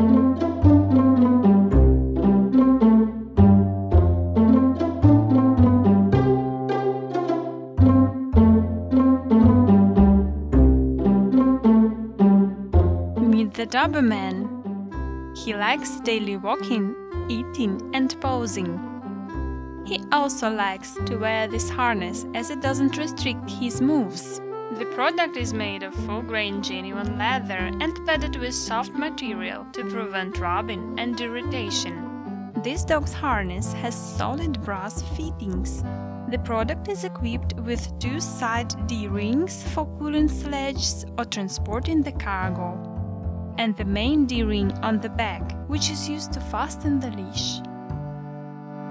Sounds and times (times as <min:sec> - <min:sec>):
Music: 0:00.0 - 0:48.9
Speech: 0:13.2 - 0:14.5, 0:15.4 - 0:18.8, 0:19.9 - 0:42.8, 0:43.6 - 0:47.7.